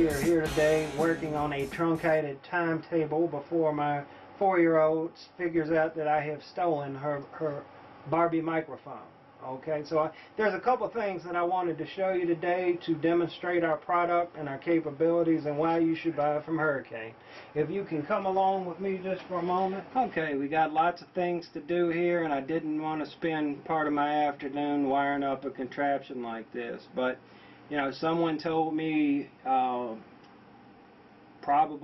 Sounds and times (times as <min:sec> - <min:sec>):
Speech: 0:00.0 - 0:30.1, 0:31.4 - 0:31.8.